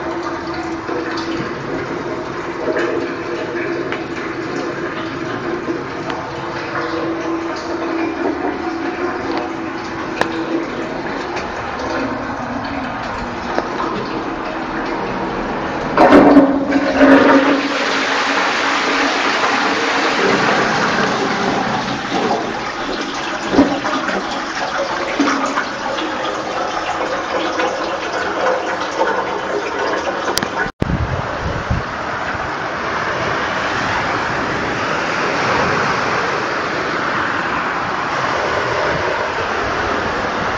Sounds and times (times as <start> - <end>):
Toilet flush: 0.0 - 40.5
Water: 0.0 - 40.5.